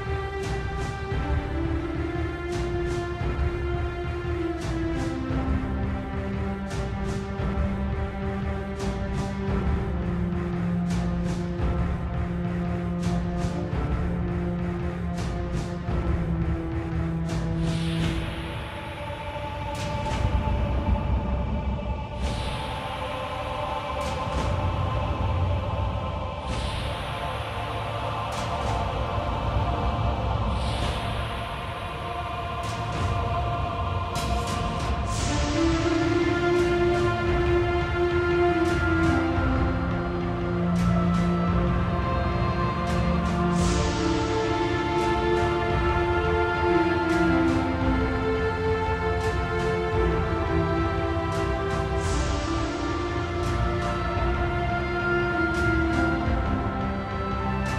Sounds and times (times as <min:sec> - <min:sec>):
Music: 0:00.0 - 0:57.7.